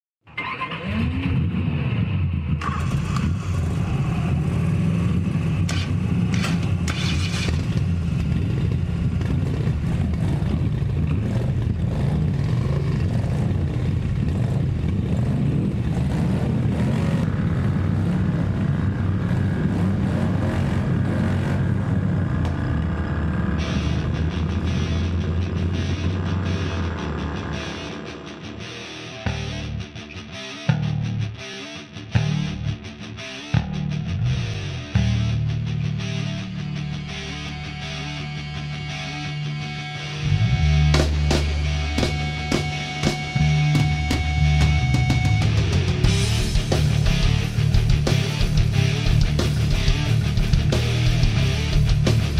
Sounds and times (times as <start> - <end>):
Motorcycle: 0.3 - 52.3.